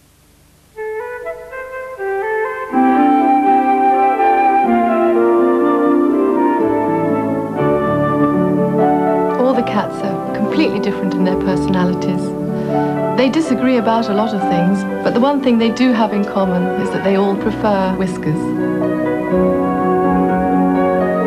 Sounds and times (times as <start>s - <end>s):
French horn: 0.8s - 21.2s
Television: 8.6s - 19.4s.